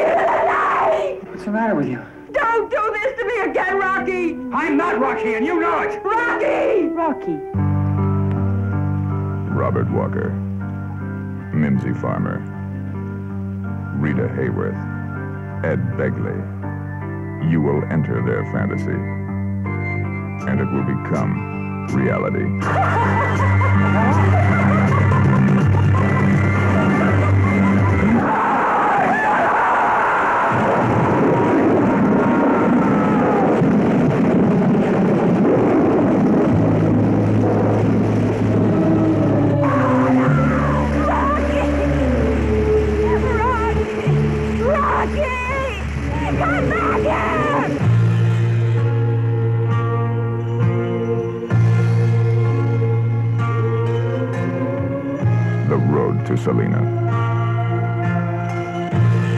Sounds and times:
Music: 0:00.0 - 0:59.3.

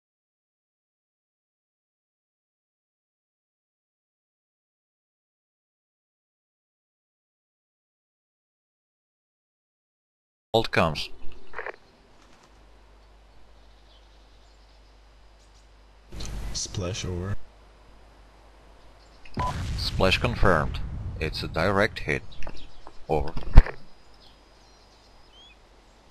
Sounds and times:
Speech: 0:10.6 - 0:11.2, 0:16.2 - 0:17.4, 0:19.4 - 0:22.2, 0:23.1 - 0:23.4.

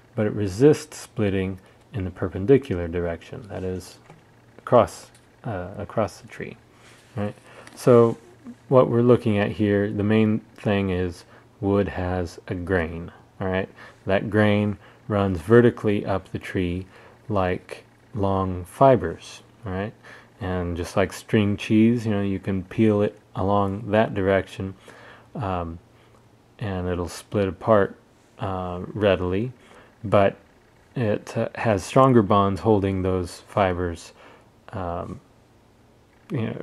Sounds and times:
Speech: 0:00.2 - 0:06.6, 0:07.2 - 0:24.8, 0:25.4 - 0:25.8, 0:26.6 - 0:35.3, 0:36.3 - 0:36.6.

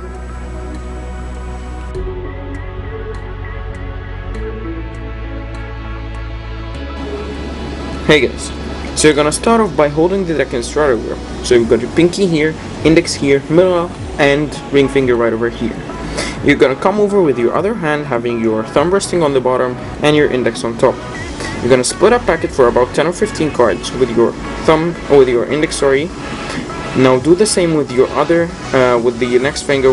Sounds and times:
Music: 0:00.0 - 0:29.9
Speech: 0:08.0 - 0:15.8, 0:16.4 - 0:21.0, 0:21.6 - 0:26.1, 0:27.0 - 0:29.9.

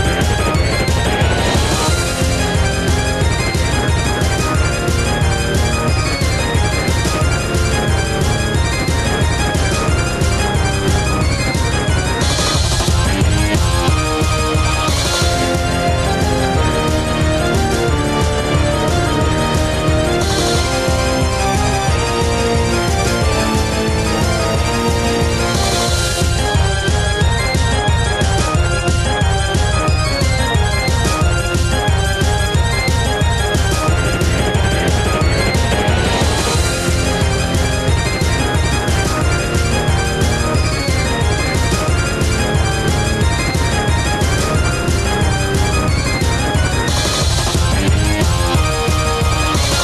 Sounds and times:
Music: 0:00.0 - 0:49.8.

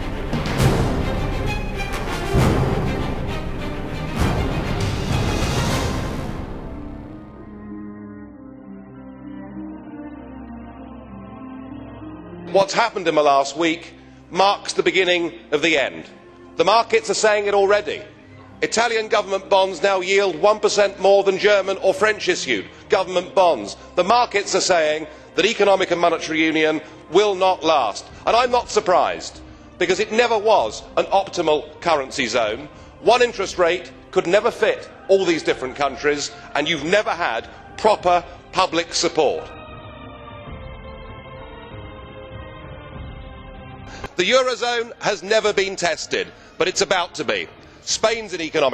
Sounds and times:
Music: 0:00.0 - 0:48.7
Speech: 0:12.5 - 0:39.5, 0:44.2 - 0:48.7.

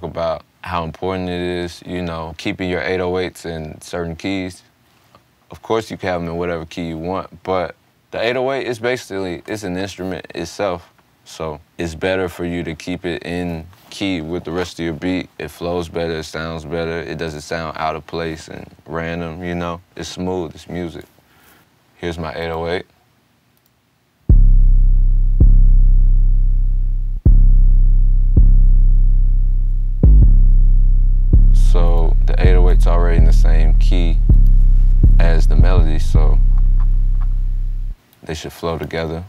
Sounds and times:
Speech: 0:00.0 - 0:04.7, 0:05.5 - 0:21.1, 0:22.0 - 0:22.9, 0:31.6 - 0:34.3, 0:35.1 - 0:36.5, 0:38.2 - 0:39.2.

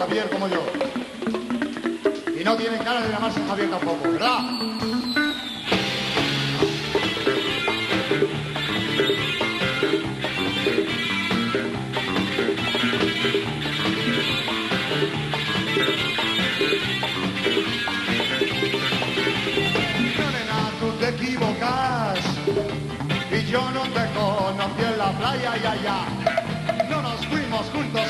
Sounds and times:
Music: 0:00.0 - 0:28.0.

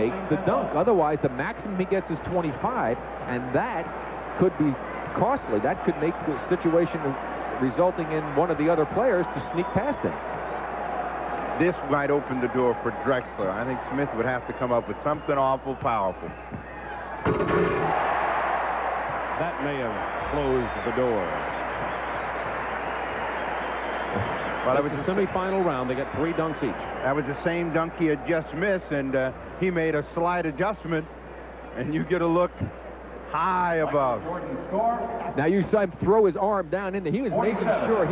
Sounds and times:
Speech: 0:11.6 - 0:16.3, 0:24.7 - 0:31.1, 0:31.8 - 0:32.7, 0:33.3 - 0:38.1.

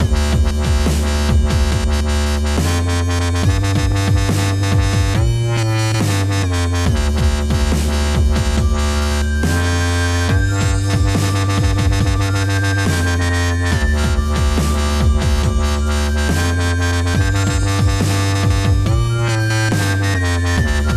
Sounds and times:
Dubstep: 0:00.0 - 0:20.9.

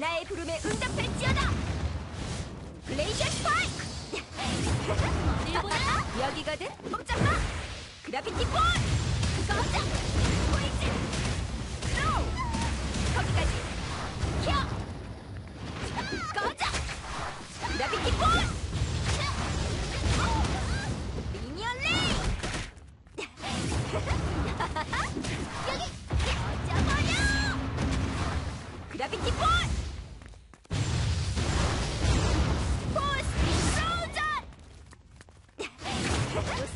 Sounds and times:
Speech: 0:08.1 - 0:08.8, 0:17.6 - 0:18.5, 0:28.9 - 0:29.7, 0:33.0 - 0:34.4, 0:36.3 - 0:36.7.

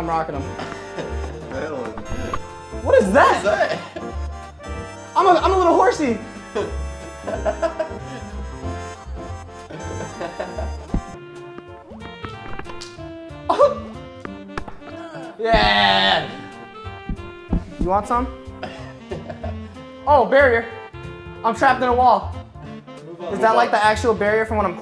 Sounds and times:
Music: 0:00.0 - 0:24.8.

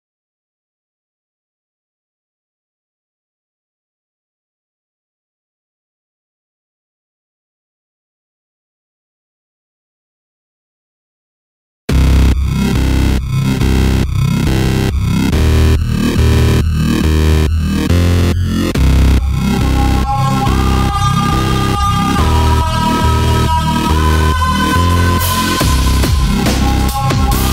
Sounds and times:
Dubstep: 0:11.9 - 0:27.5.

